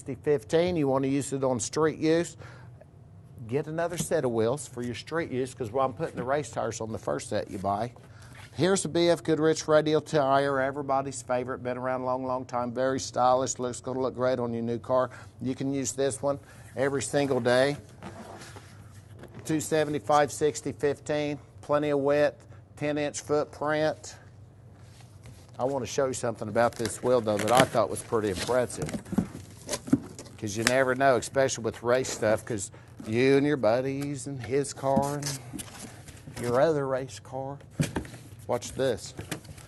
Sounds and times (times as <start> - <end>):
Speech: 0.0 - 2.4, 3.4 - 8.0, 8.6 - 17.8, 19.4 - 24.2, 25.6 - 29.0, 30.4 - 35.4, 36.4 - 37.7, 38.5 - 39.2.